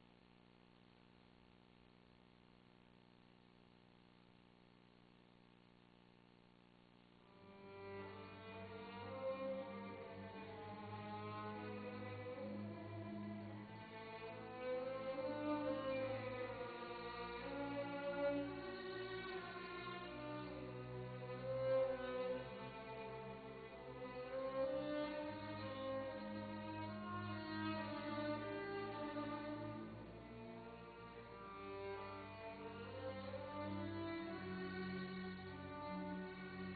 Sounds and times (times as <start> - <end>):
Violin, fiddle: 7.3 - 36.7.